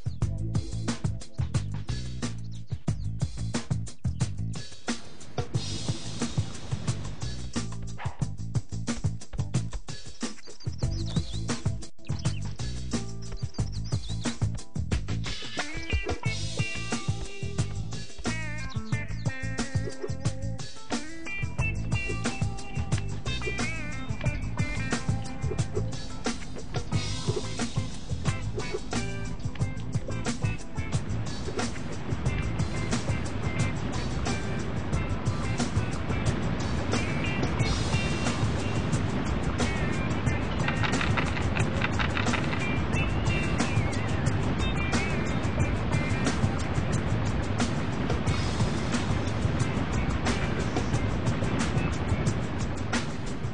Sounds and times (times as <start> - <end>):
Music: 0.0 - 53.5.